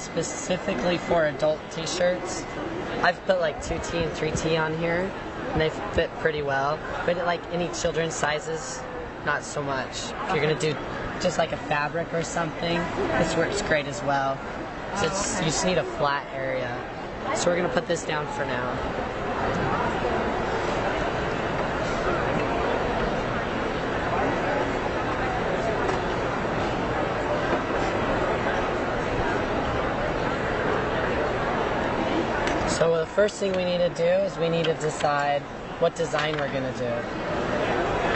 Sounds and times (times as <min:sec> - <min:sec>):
Speech: 0:00.0 - 0:18.9, 0:32.6 - 0:38.1.